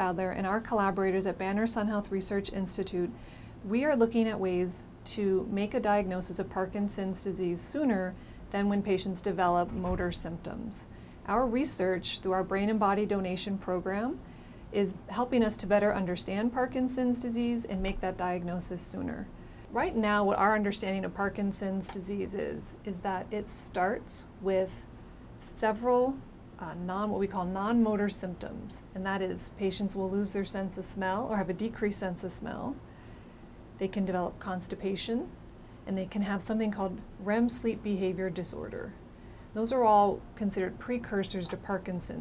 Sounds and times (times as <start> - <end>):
Speech: 0.0 - 14.2, 14.8 - 24.8, 25.4 - 32.8, 33.8 - 35.3, 35.9 - 39.0, 39.6 - 42.2.